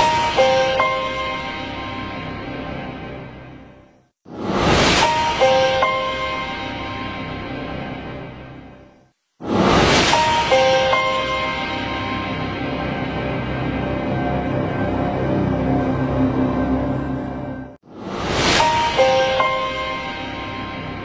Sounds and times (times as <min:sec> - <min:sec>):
Music: 0:00.0 - 0:04.2, 0:05.1 - 0:09.2, 0:10.2 - 0:17.9, 0:18.5 - 0:21.0.